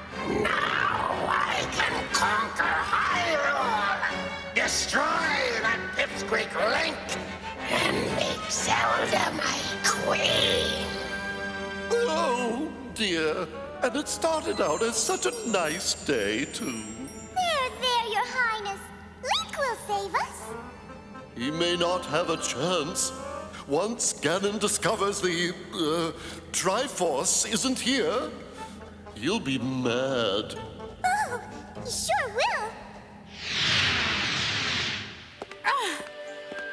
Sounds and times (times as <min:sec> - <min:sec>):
Music: 0:00.0 - 0:34.4, 0:35.2 - 0:36.7
Speech: 0:00.4 - 0:10.8, 0:12.0 - 0:20.4, 0:29.2 - 0:32.8.